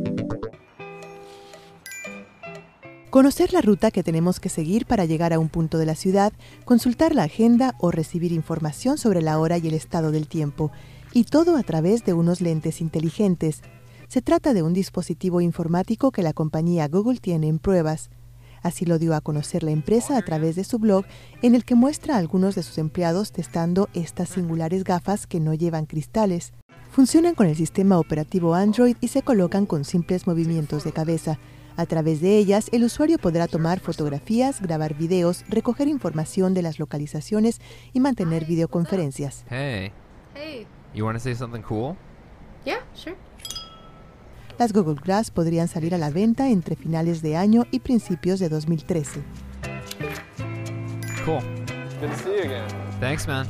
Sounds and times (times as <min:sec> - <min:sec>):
Music: 0:00.0 - 0:16.1, 0:18.7 - 0:39.2, 0:44.7 - 0:53.4
Speech: 0:03.2 - 0:18.1, 0:18.7 - 0:42.0, 0:44.6 - 0:49.2, 0:51.3 - 0:53.4.